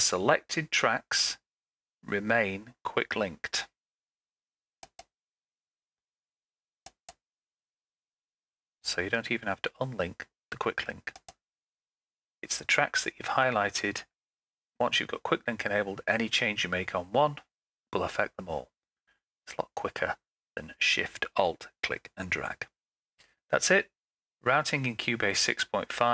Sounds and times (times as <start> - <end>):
Speech: 0.0 - 3.8, 8.8 - 11.2, 12.4 - 14.1, 14.8 - 18.8, 19.5 - 22.7, 23.5 - 26.1.